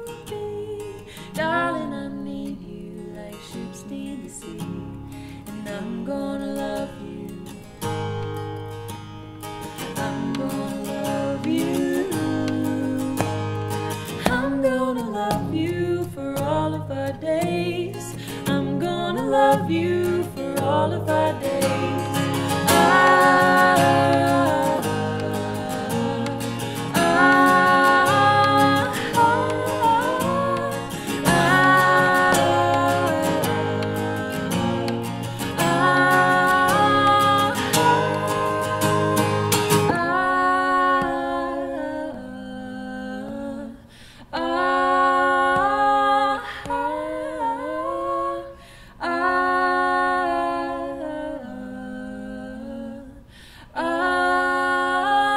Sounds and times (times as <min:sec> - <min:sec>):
Singing: 0:09.9 - 0:13.4, 0:14.2 - 0:55.3.